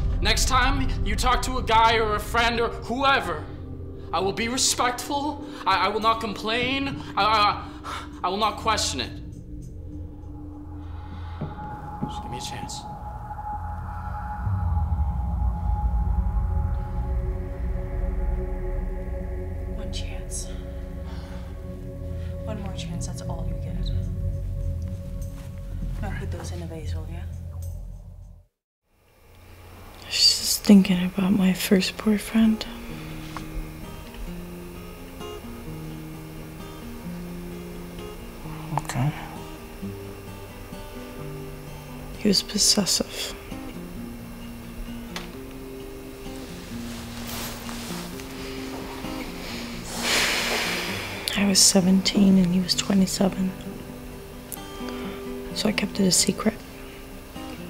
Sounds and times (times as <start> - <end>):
Music: 0.0 - 57.7.